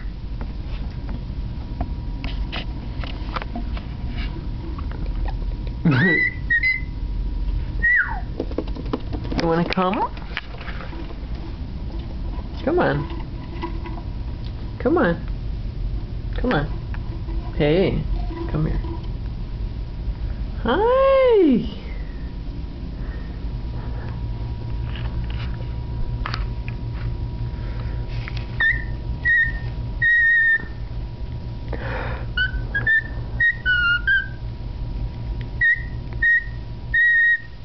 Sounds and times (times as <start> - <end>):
Bird: 5.9 - 6.9, 28.6 - 30.8, 32.4 - 34.4.